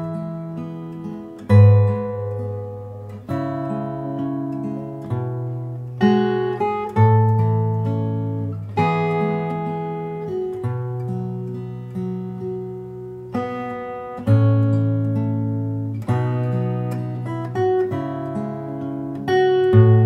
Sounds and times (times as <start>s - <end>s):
Acoustic guitar: 0.0s - 20.0s.